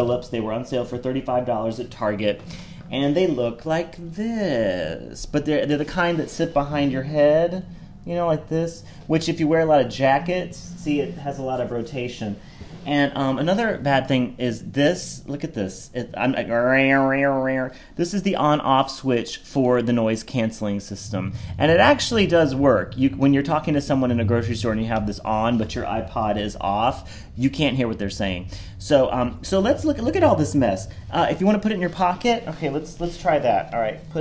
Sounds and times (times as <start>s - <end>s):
Speech: 0.0s - 34.2s.